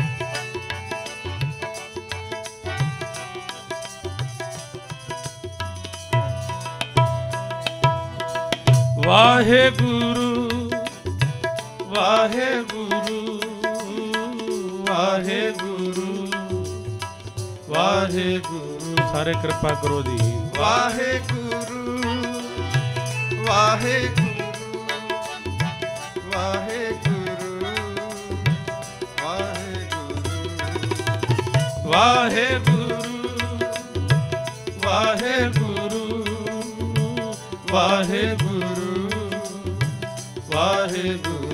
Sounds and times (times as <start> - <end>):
Music: 0.0 - 41.5.